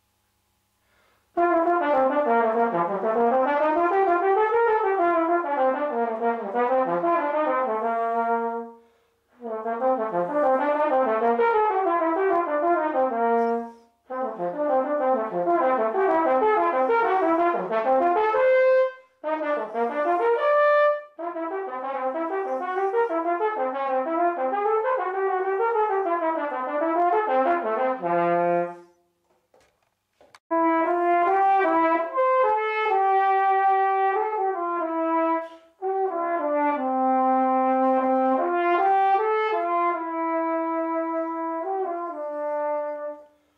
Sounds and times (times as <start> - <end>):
Trumpet: 0.0 - 29.7, 30.5 - 43.5.